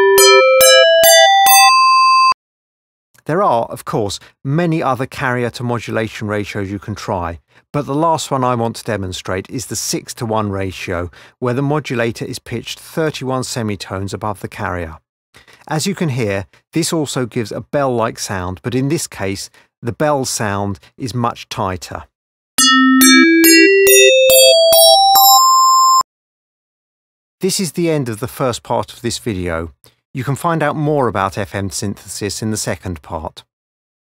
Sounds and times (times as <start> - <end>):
Speech: 3.2 - 15.0, 15.6 - 22.1, 27.4 - 33.5
Synthesizer: 22.6 - 26.0.